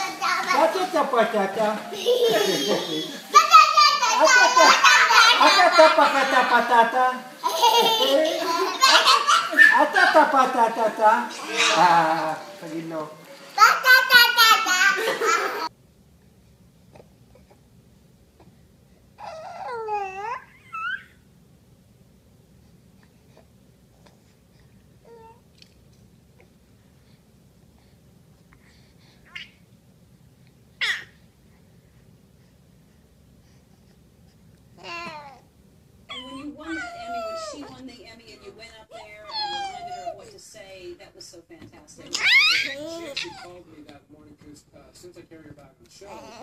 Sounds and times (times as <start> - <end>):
Speech: 36.2 - 46.4.